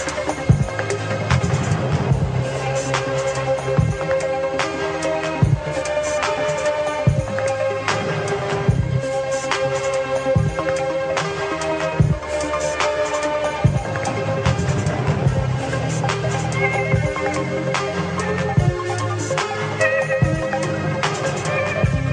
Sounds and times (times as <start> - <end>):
Music: 0.0 - 22.1.